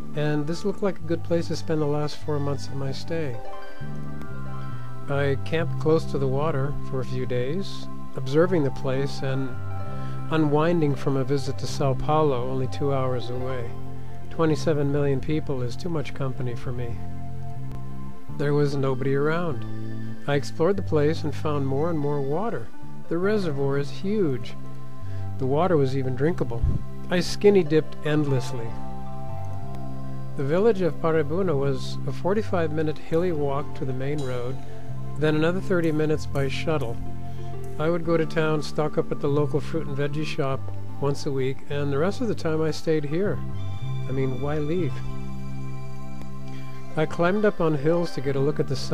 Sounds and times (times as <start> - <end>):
Music: 0.0 - 48.9
Speech: 0.2 - 3.4, 5.1 - 9.6, 10.3 - 13.7, 14.4 - 17.0, 18.4 - 19.6, 20.3 - 24.6, 25.4 - 28.8, 30.4 - 34.6, 35.2 - 37.0, 37.8 - 43.4, 44.1 - 45.0, 47.0 - 48.9.